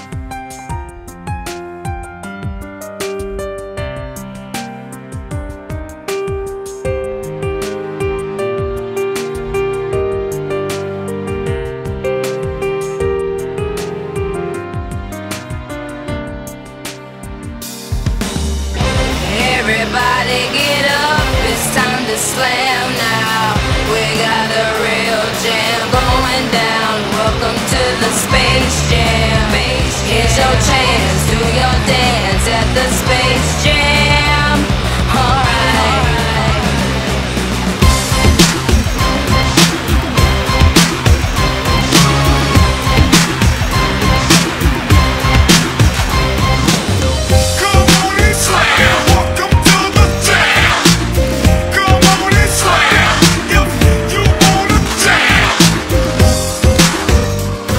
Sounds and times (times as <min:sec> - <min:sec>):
Music: 0:00.0 - 0:57.7.